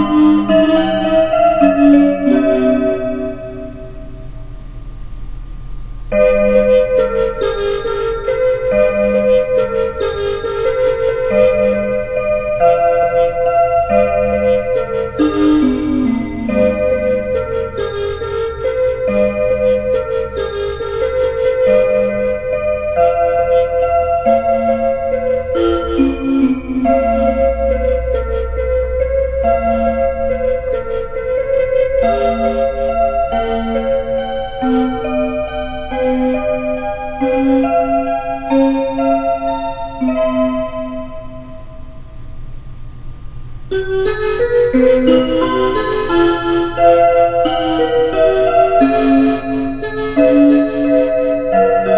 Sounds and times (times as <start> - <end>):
Music: 0.0 - 4.5, 6.1 - 42.2, 43.7 - 51.9.